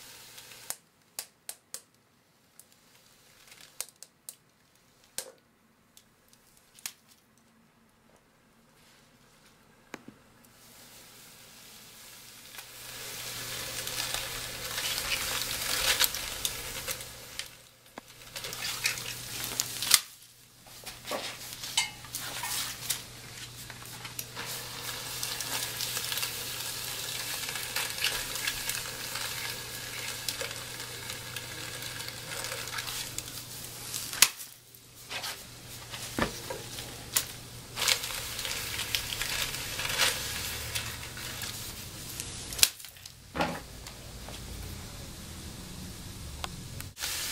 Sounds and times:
Frying (food): 0.0s - 0.8s, 10.4s - 47.3s.

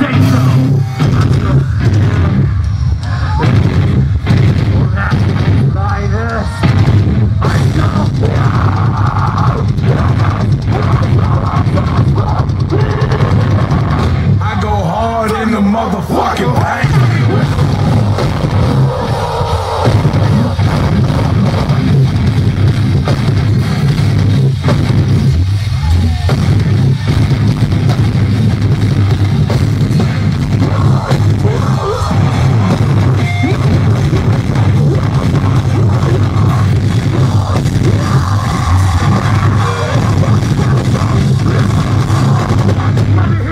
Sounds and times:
Music: 0.0s - 43.5s.

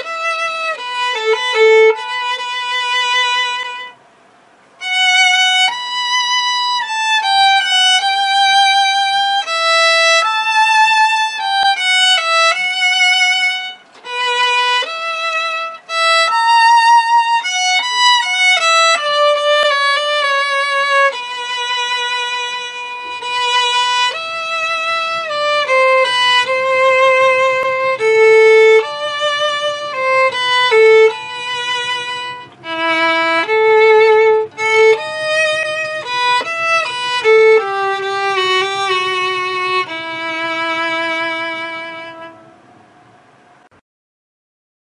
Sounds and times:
Violin, fiddle: 0.0s - 4.2s, 4.8s - 43.6s.

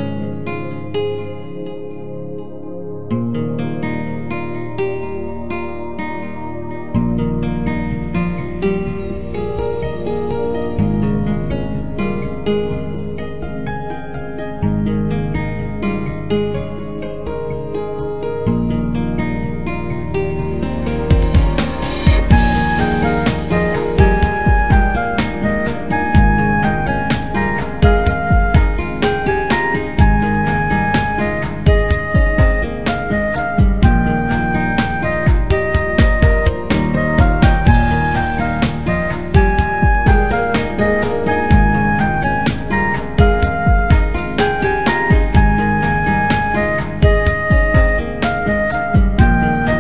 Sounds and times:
Theme music: 8.0s - 14.0s, 20.0s - 48.8s.

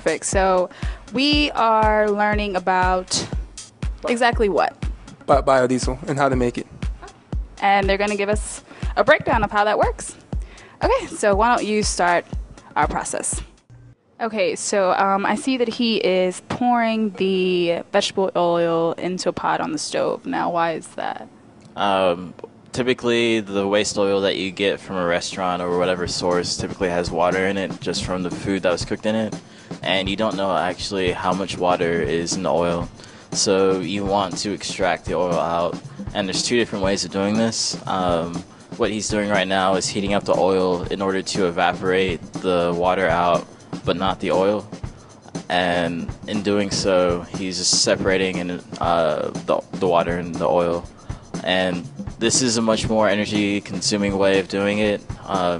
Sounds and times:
Music: 0.0s - 55.5s
Speech: 5.3s - 6.6s, 7.6s - 10.1s, 14.2s - 21.2s, 21.8s - 44.6s, 45.4s - 55.5s.

